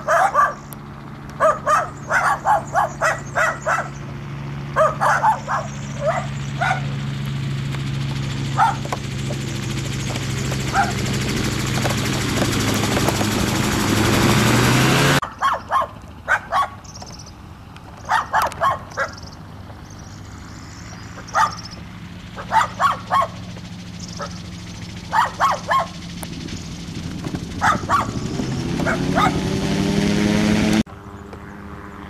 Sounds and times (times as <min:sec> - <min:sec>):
Vehicle: 0:00.0 - 0:32.0
Animal: 0:21.2 - 0:21.8.